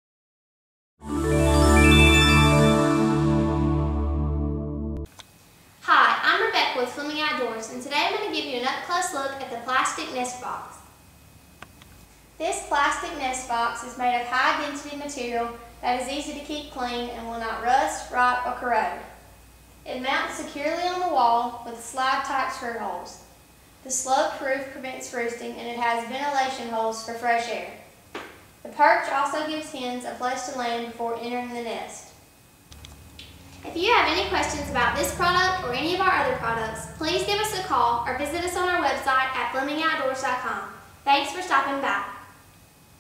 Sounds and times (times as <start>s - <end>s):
Speech: 5.8s - 10.9s, 12.4s - 19.2s, 19.9s - 23.3s, 23.9s - 27.9s, 28.7s - 32.2s, 33.6s - 42.4s.